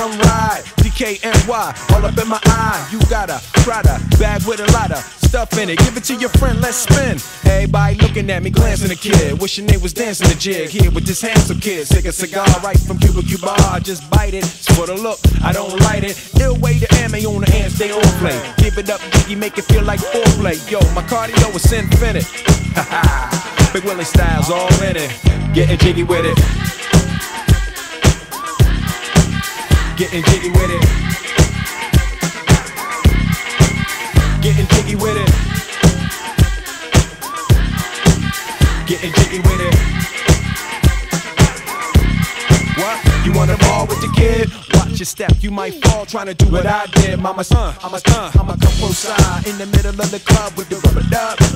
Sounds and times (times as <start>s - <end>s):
Disco: 0.0s - 51.5s.